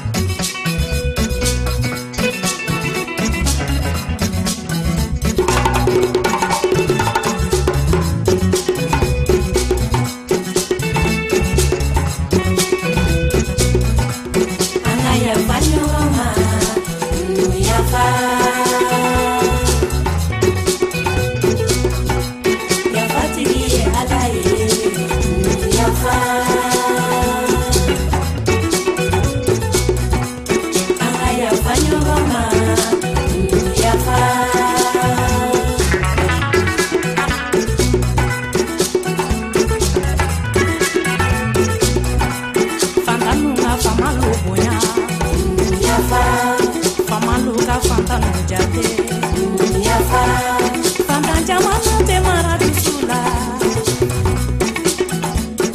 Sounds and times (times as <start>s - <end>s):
Music: 0.0s - 55.7s.